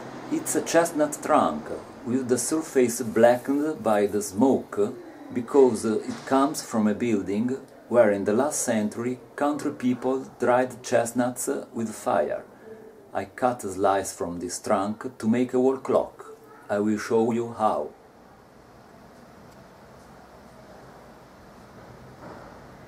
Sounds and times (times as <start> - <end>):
Speech: 0.3 - 17.9.